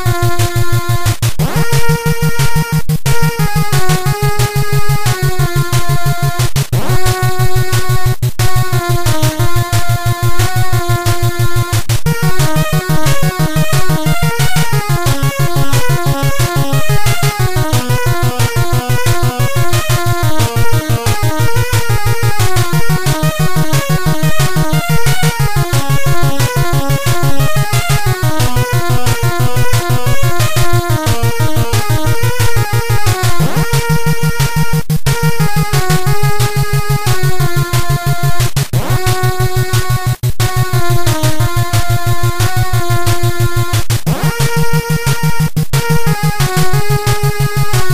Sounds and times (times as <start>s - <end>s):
Music: 0.0s - 47.9s.